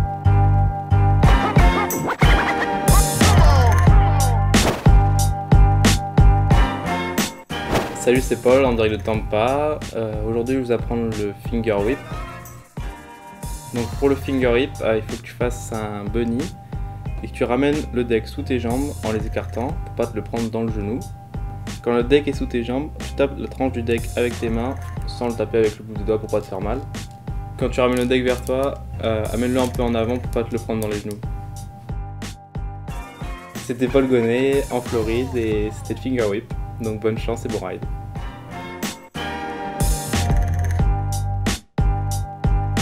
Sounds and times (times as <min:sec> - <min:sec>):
Music: 0:00.0 - 0:42.8
Speech: 0:08.0 - 0:12.0, 0:13.7 - 0:16.6, 0:17.2 - 0:21.1, 0:21.8 - 0:26.9, 0:27.6 - 0:31.2, 0:33.6 - 0:37.9.